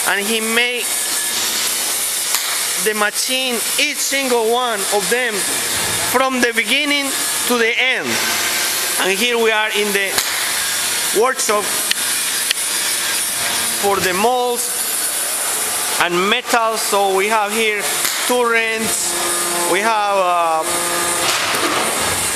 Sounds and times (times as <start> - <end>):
Speech: 0.0 - 0.9, 2.8 - 8.2, 9.0 - 10.2, 11.2 - 11.7, 13.8 - 14.8, 16.0 - 19.1, 19.7 - 20.7
Inside, large room or hall: 0.0 - 22.3.